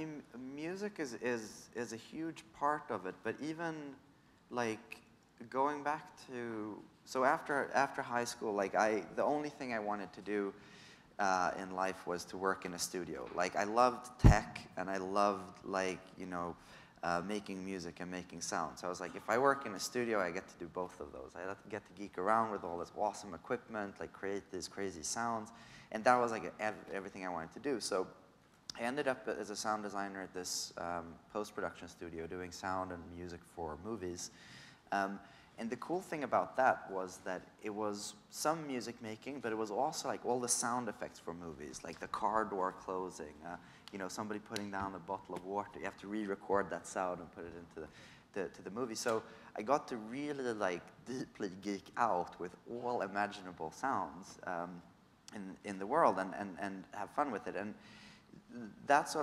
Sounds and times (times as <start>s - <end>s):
Speech: 0.0s - 10.6s, 11.2s - 57.8s, 58.4s - 59.2s.